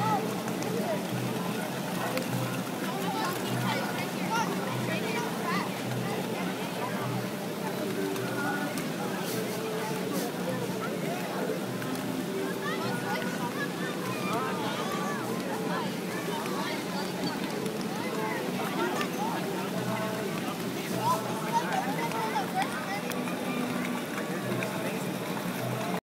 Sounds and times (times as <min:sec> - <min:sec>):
Boat, Water vehicle: 0:00.0 - 0:26.0
Music: 0:00.0 - 0:26.0
Speech: 0:00.0 - 0:26.0.